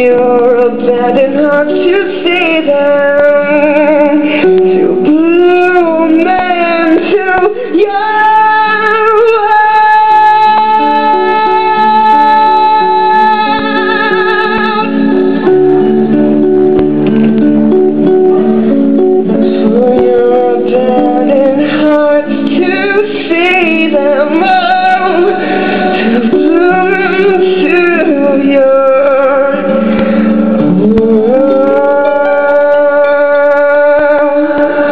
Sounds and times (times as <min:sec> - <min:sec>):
Female singing: 0:00.0 - 0:15.5, 0:19.6 - 0:29.8, 0:30.6 - 0:34.9.